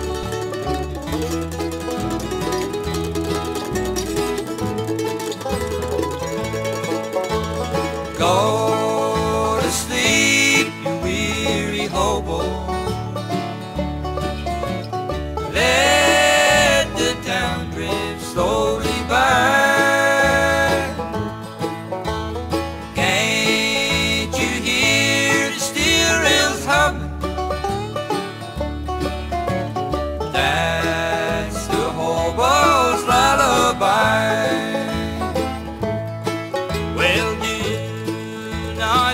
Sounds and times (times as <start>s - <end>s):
Music: 0.0s - 39.1s.